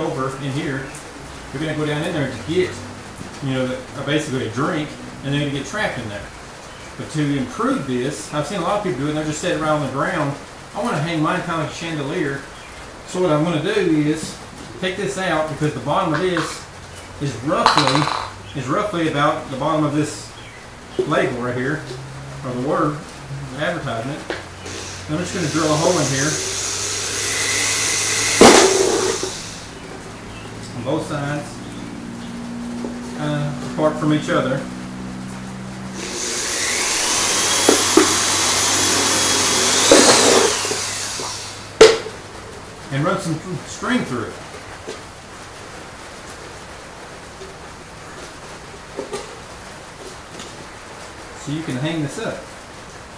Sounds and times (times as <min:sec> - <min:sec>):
Speech: 0:00.0 - 0:02.8, 0:03.4 - 0:06.3, 0:07.0 - 0:12.5, 0:13.1 - 0:16.6, 0:17.2 - 0:18.0, 0:18.6 - 0:20.3, 0:21.0 - 0:21.8, 0:22.4 - 0:24.3, 0:25.1 - 0:26.4, 0:30.7 - 0:31.6, 0:33.2 - 0:34.7, 0:42.9 - 0:44.4, 0:51.4 - 0:52.5.